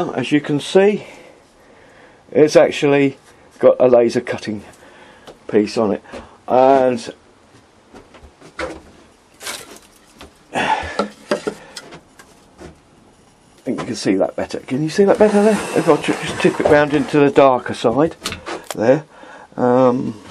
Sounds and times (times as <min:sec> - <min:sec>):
Speech: 0:00.0 - 0:01.1, 0:02.3 - 0:04.7, 0:05.5 - 0:07.2, 0:13.6 - 0:20.2.